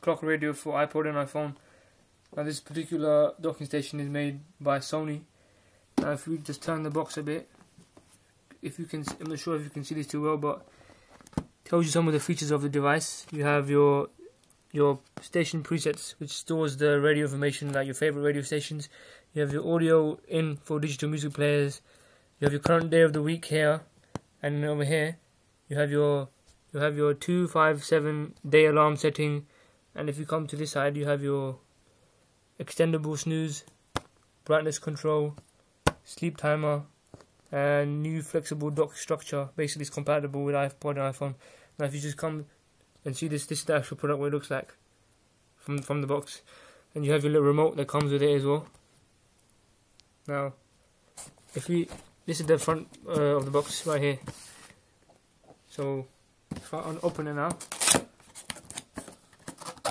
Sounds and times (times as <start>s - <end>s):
Speech: 0.0s - 1.6s, 2.4s - 5.3s, 6.0s - 7.5s, 8.5s - 10.7s, 11.7s - 21.8s, 22.4s - 31.6s, 32.6s - 33.7s, 34.4s - 35.4s, 36.1s - 36.9s, 37.5s - 44.8s, 45.6s - 48.8s, 50.3s - 50.6s, 51.6s - 54.3s, 55.7s - 57.6s.